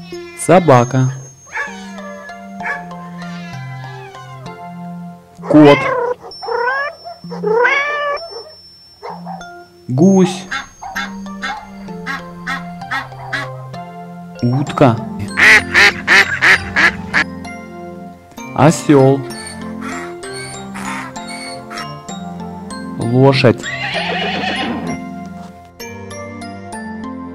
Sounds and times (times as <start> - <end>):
Music: 0.0 - 27.3.